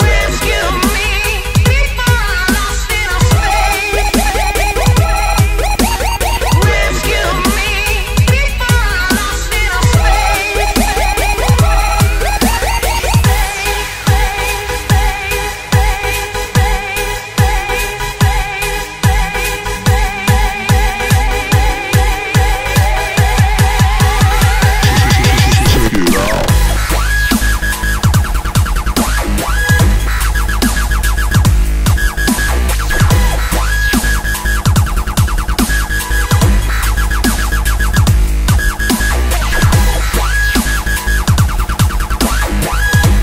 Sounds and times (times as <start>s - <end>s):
Dubstep: 0.0s - 43.2s
Soundtrack music: 0.0s - 43.2s.